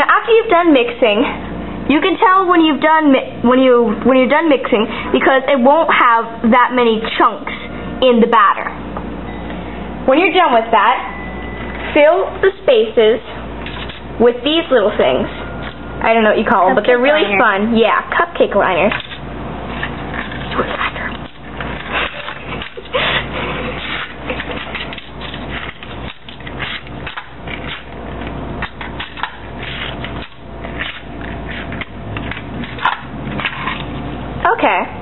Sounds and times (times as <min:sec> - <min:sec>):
Speech: 0:00.0 - 0:08.8, 0:10.1 - 0:11.1, 0:12.0 - 0:13.4, 0:14.2 - 0:15.3, 0:16.0 - 0:19.0, 0:34.4 - 0:35.0.